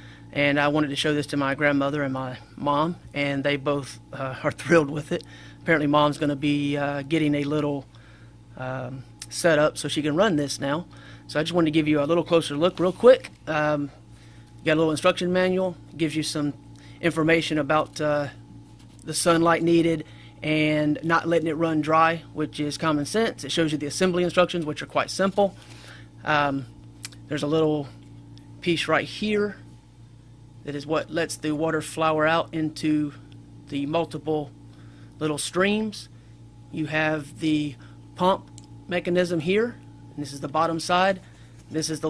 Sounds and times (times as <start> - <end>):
Speech: 0.4 - 7.9, 8.6 - 14.0, 14.6 - 18.4, 19.0 - 25.6, 26.2 - 26.7, 27.3 - 28.0, 28.6 - 29.6, 30.6 - 34.5, 35.2 - 36.1, 36.7 - 42.1.